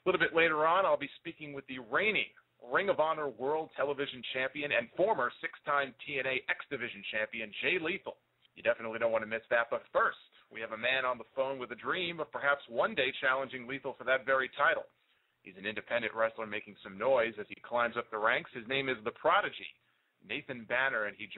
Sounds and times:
Speech: 0.0 - 21.3.

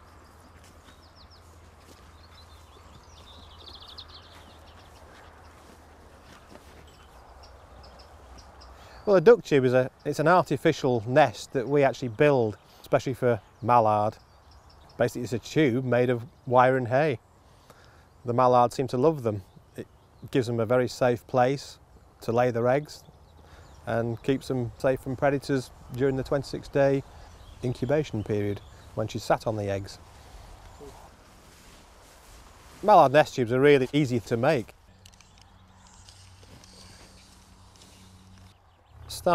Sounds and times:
Speech: 9.1 - 14.2, 15.0 - 17.2, 18.3 - 19.4, 20.2 - 23.0, 23.9 - 30.0, 32.8 - 34.7, 39.1 - 39.3.

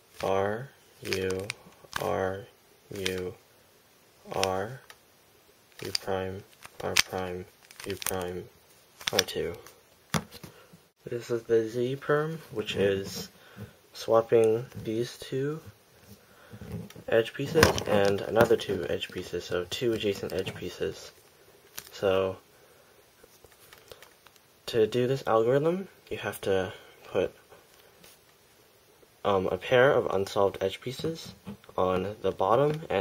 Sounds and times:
Inside, small room: 0.0 - 33.0
Speech: 0.2 - 3.4, 4.3 - 4.9, 5.8 - 8.5, 9.1 - 9.7, 11.0 - 13.3, 14.0 - 15.7, 17.1 - 21.2, 21.9 - 22.4, 24.7 - 27.4, 29.2 - 33.0.

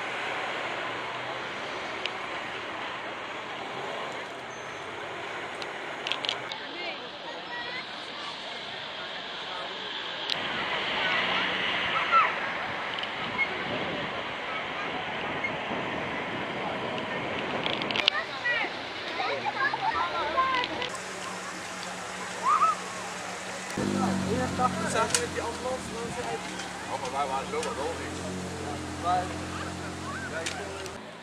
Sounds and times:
Motor vehicle (road): 0.0 - 31.2
Speech: 6.5 - 31.2.

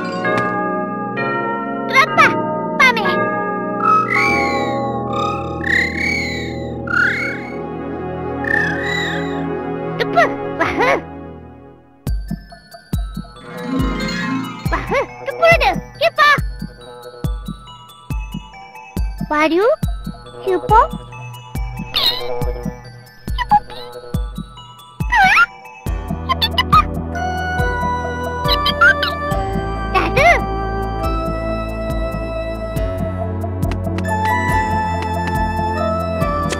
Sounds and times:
Music: 0.0 - 36.5
Speech: 1.9 - 3.2, 14.7 - 16.4, 19.3 - 19.8, 20.4 - 21.0, 30.0 - 30.5.

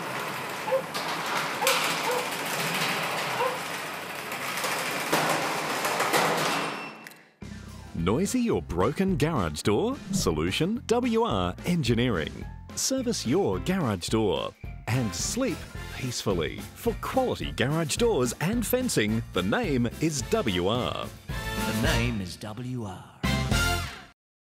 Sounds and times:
Music: 7.4 - 22.4, 23.2 - 24.2
Speech: 8.0 - 21.1, 21.7 - 23.2.

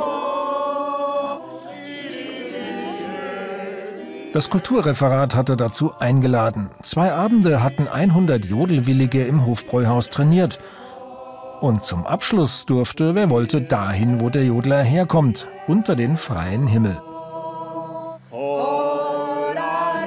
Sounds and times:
Music: 0.0 - 20.0
Singing: 0.0 - 20.0
Speech: 4.4 - 10.6, 11.6 - 17.0.

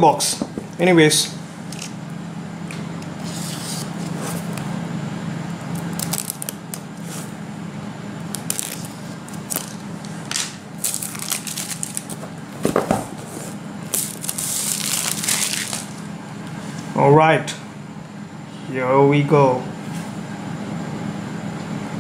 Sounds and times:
Speech: 0.0 - 1.4, 17.0 - 17.7, 18.6 - 19.8
Crackle: 5.8 - 6.9, 8.2 - 9.8, 10.8 - 12.1, 13.9 - 16.0.

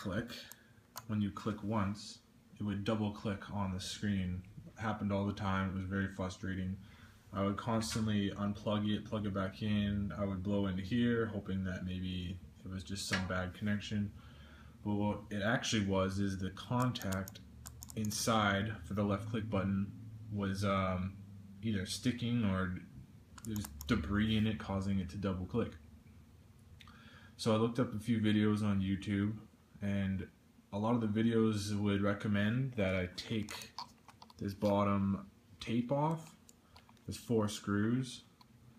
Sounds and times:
Speech: 0.0 - 14.2, 14.8 - 25.8, 27.4 - 33.8, 34.4 - 36.4, 37.1 - 38.3.

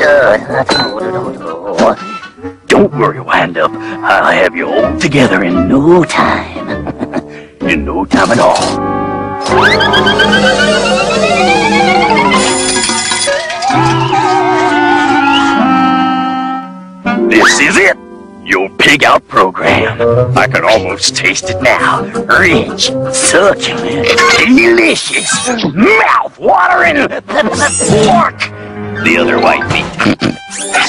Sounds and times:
Speech: 17.3 - 29.9.

